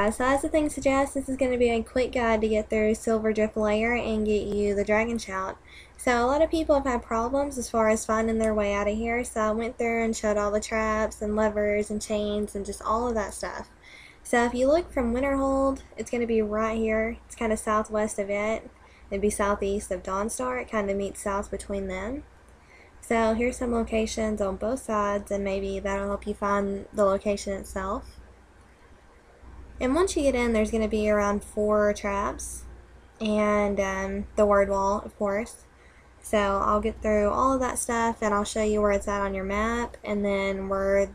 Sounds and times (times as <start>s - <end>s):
Speech: 0.0s - 22.2s, 23.0s - 28.1s, 29.8s - 35.6s, 36.2s - 41.1s.